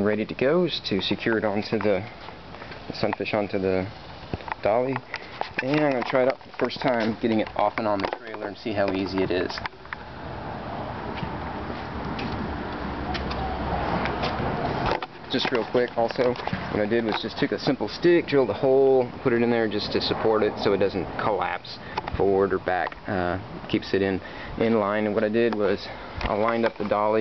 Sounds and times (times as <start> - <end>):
Speech: 0.0 - 2.1, 2.9 - 4.0, 4.6 - 5.0, 5.6 - 9.7, 15.3 - 27.2.